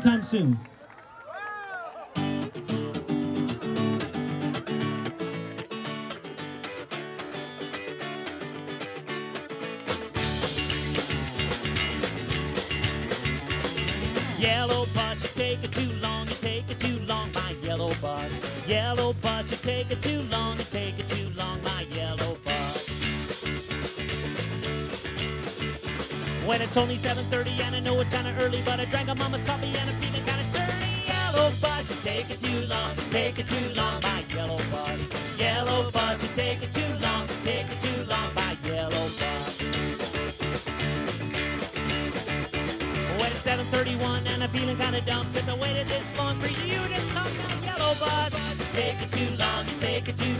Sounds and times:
Music: 0:02.2 - 0:50.4.

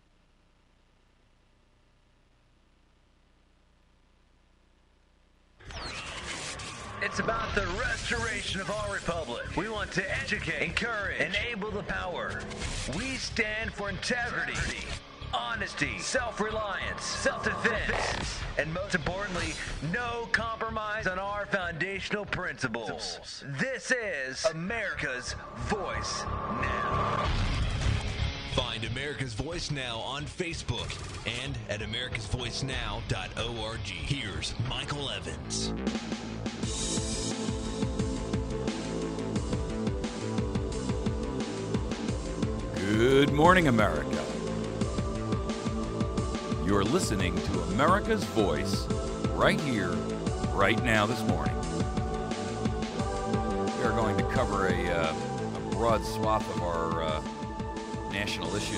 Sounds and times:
Music: 0:05.6 - 0:58.7
Speech: 0:07.0 - 0:27.0, 0:28.6 - 0:35.7, 0:42.8 - 0:44.4, 0:46.6 - 0:51.6, 0:53.8 - 0:55.2, 0:55.8 - 0:57.2, 0:58.1 - 0:58.7.

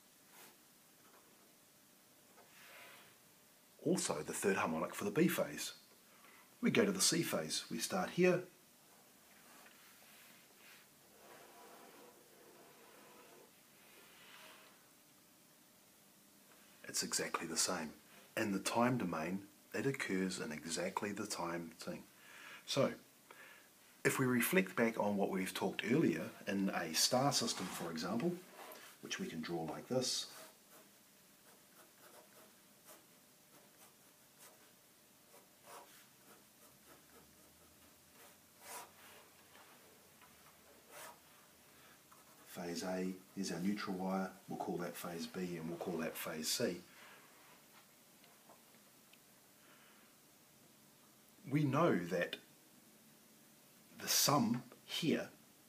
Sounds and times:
Speech: 0:03.8 - 0:05.8, 0:06.6 - 0:08.6, 0:16.8 - 0:22.1, 0:22.7 - 0:23.0, 0:24.1 - 0:30.4, 0:42.5 - 0:46.9, 0:51.4 - 0:52.5, 0:54.0 - 0:55.4
Writing: 0:11.1 - 0:13.5, 0:30.2 - 0:41.5, 0:42.1 - 0:42.6.

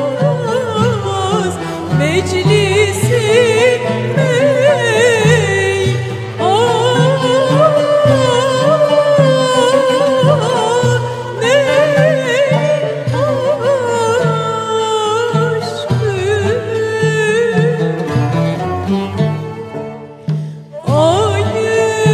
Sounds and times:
Violin, fiddle: 0:00.0 - 0:22.1.

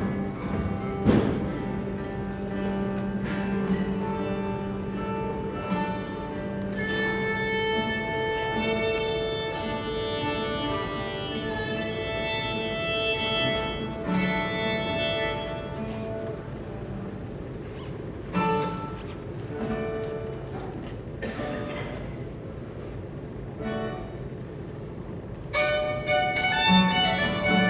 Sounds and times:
Violin, fiddle: 0:06.0 - 0:16.6, 0:25.5 - 0:27.6.

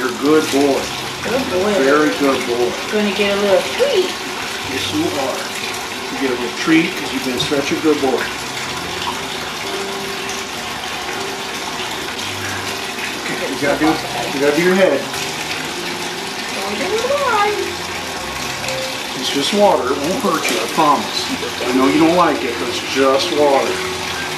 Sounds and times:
Sink (filling or washing): 0:00.0 - 0:24.3
Water: 0:00.0 - 0:24.3
Water tap, faucet: 0:00.0 - 0:24.3.

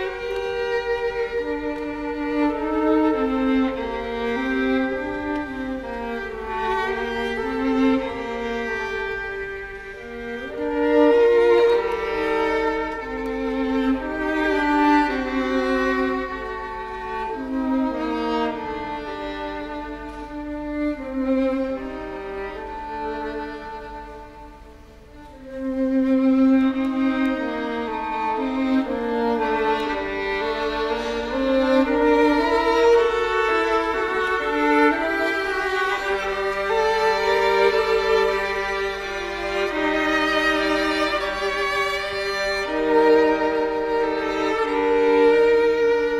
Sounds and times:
Violin, fiddle: 0:00.0 - 0:46.1.

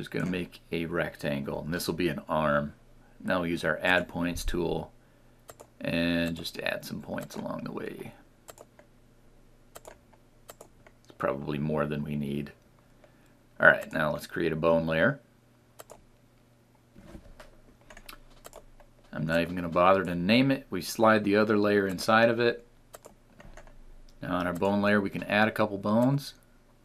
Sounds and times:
Speech: 0:00.0 - 0:04.9, 0:05.8 - 0:08.2, 0:11.2 - 0:12.6, 0:13.6 - 0:15.3, 0:19.1 - 0:22.7, 0:24.2 - 0:26.4
Computer keyboard: 0:08.5 - 0:08.7, 0:09.8 - 0:10.7, 0:15.8 - 0:16.0, 0:17.9 - 0:18.7, 0:23.0 - 0:23.8.

